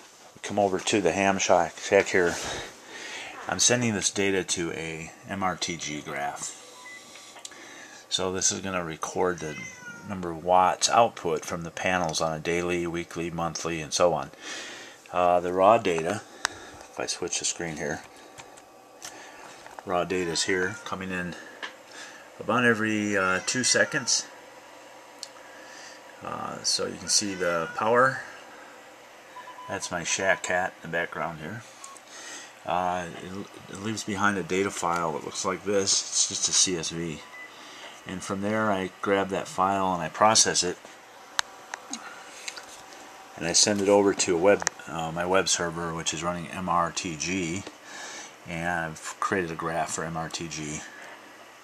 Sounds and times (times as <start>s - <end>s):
Speech: 0.4s - 2.7s, 3.3s - 6.6s, 8.1s - 14.4s, 15.1s - 16.3s, 17.0s - 18.1s, 19.8s - 21.5s, 22.4s - 24.3s, 26.2s - 28.4s, 29.7s - 31.7s, 32.7s - 37.3s, 38.1s - 40.8s, 43.4s - 47.8s, 48.5s - 51.0s.